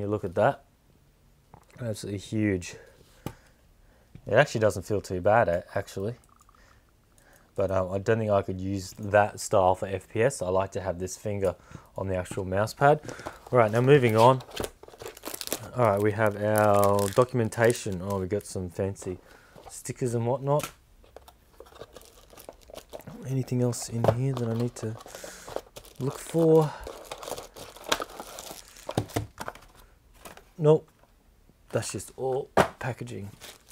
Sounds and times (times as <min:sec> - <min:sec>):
Speech: 0:00.0 - 0:00.7, 0:01.8 - 0:02.9, 0:04.2 - 0:06.2, 0:07.6 - 0:14.4, 0:15.6 - 0:20.7, 0:23.1 - 0:25.0, 0:26.0 - 0:26.8, 0:30.6 - 0:30.9, 0:31.7 - 0:33.4
Crumpling, crinkling: 0:13.1 - 0:18.6, 0:21.0 - 0:30.5, 0:33.2 - 0:33.7.